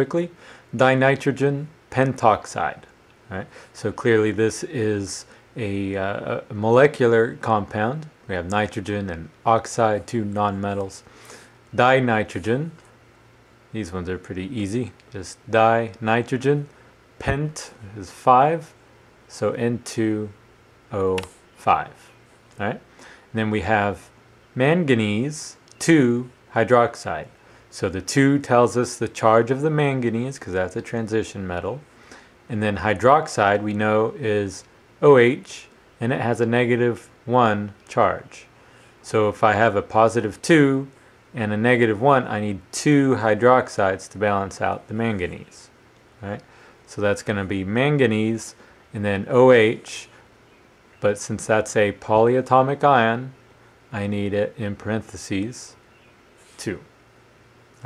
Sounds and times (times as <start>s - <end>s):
Speech: 0.0s - 11.1s, 11.8s - 12.8s, 13.7s - 31.8s, 32.5s - 50.1s, 51.0s - 55.8s, 56.6s - 56.9s.